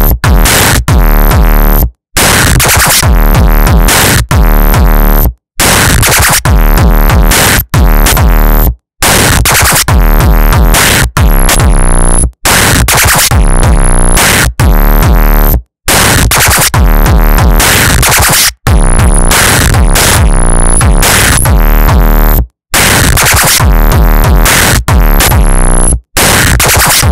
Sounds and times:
Hip hop music: 0.0s - 27.1s.

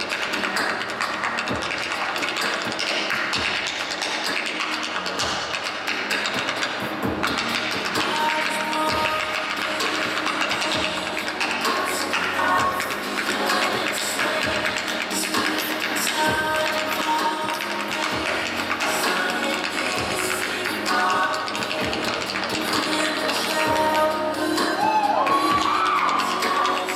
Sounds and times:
Music: 0.0s - 26.9s.

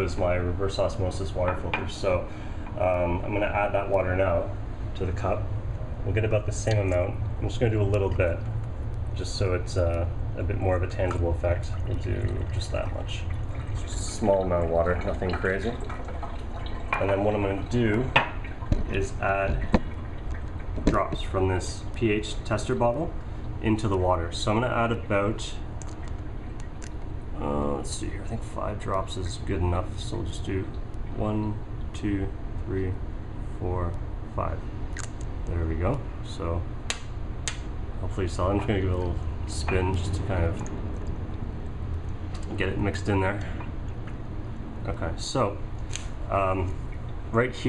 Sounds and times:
Water: 0.0s - 36.5s, 38.0s - 47.6s
Water tap, faucet: 11.6s - 20.8s
Sink (filling or washing): 11.6s - 21.3s.

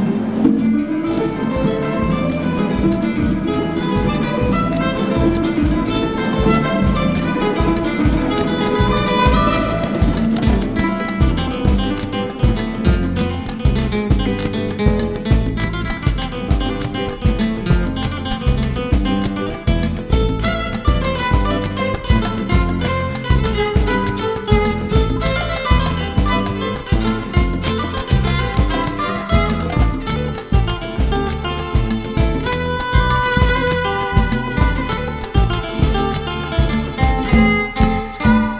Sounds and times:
Tender music: 0.0s - 38.5s.

